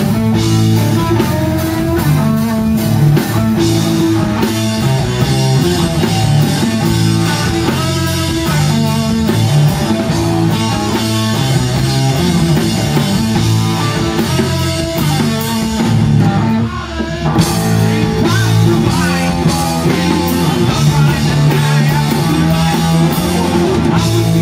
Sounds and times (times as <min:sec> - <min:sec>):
Music: 0:00.0 - 0:24.4.